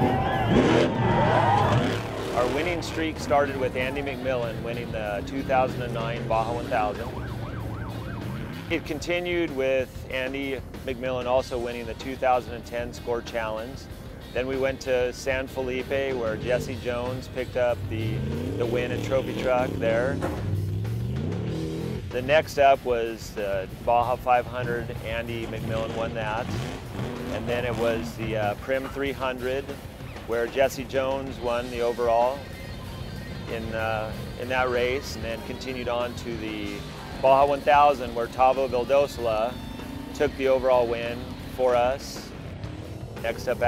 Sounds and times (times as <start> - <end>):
Music: 0.0 - 43.6
Vehicle: 0.0 - 43.6
Speech: 2.4 - 7.1, 8.7 - 20.2, 22.1 - 26.6, 27.4 - 32.4, 33.5 - 39.5, 40.2 - 42.3, 43.2 - 43.6.